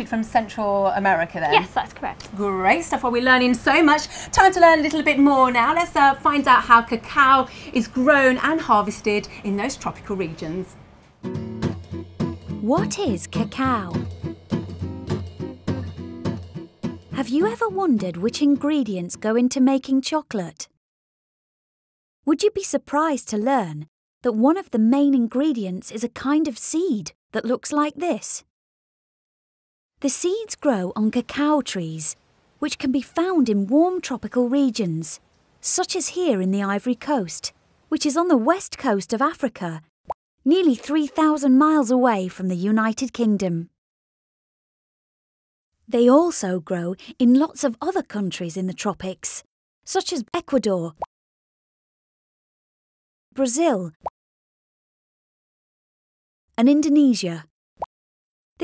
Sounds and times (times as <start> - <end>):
Speech: 0.0 - 10.8, 12.6 - 14.0, 17.2 - 20.7, 22.3 - 28.4, 30.0 - 39.8, 40.5 - 43.7, 45.9 - 51.0, 53.4 - 54.0, 56.6 - 57.5.